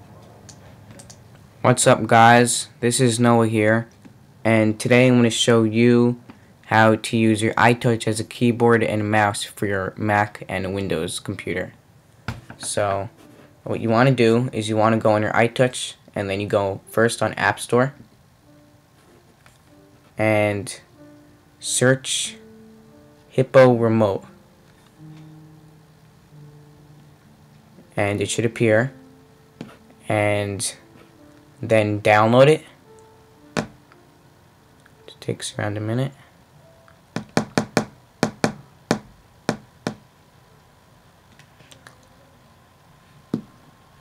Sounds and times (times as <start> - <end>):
Speech: 1.6 - 3.9, 4.5 - 11.8, 12.6 - 13.1, 13.7 - 18.0, 20.2 - 20.8, 21.6 - 22.4, 23.4 - 24.3, 28.0 - 29.0, 30.1 - 30.8, 31.6 - 32.7, 35.1 - 36.2
Music: 1.7 - 11.6, 12.4 - 44.0.